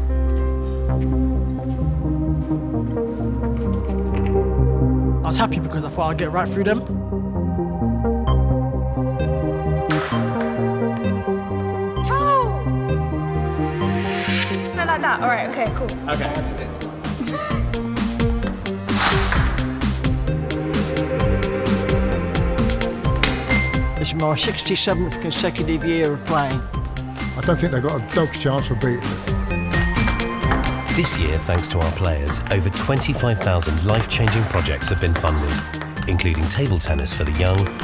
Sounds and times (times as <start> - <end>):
Music: 0.0 - 37.8.